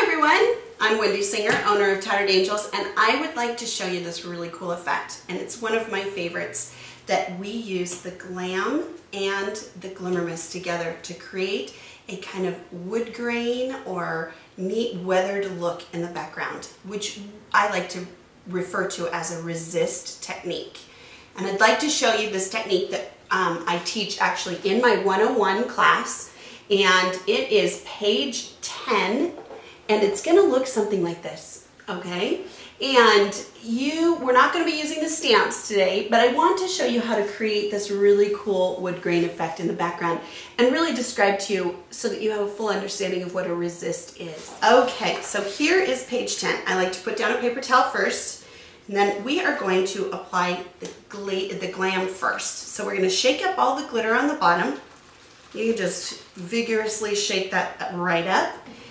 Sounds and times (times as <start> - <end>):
Speech: 0.0 - 54.9, 55.6 - 58.6.